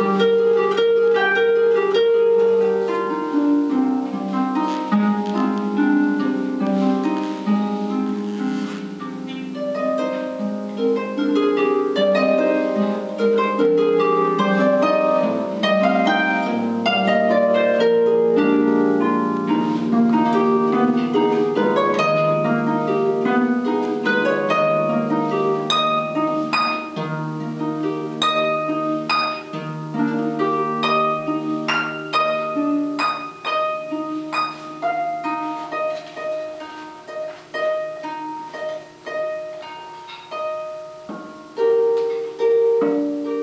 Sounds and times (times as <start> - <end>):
Harp: 0.0 - 43.4.